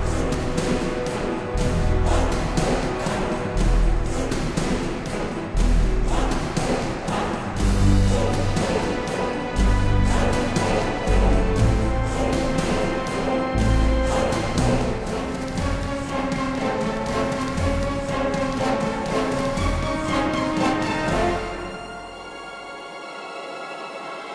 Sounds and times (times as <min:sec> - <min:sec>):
Video game music: 0:00.0 - 0:24.3.